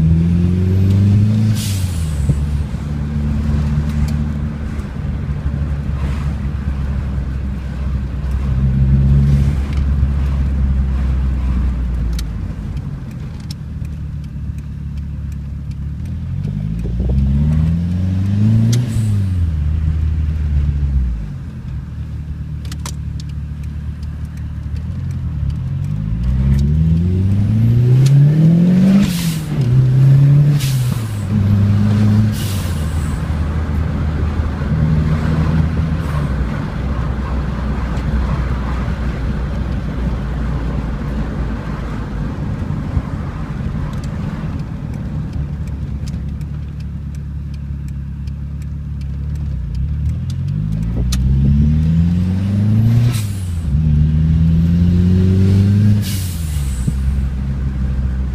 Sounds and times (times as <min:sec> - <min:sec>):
Car: 0:00.0 - 0:58.3.